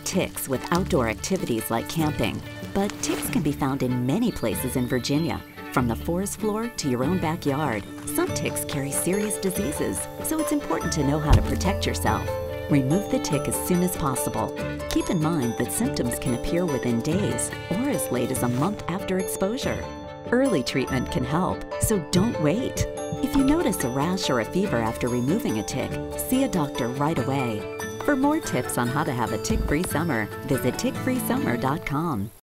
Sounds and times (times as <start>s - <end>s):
Music: 0.0s - 32.4s
Speech: 0.0s - 32.4s.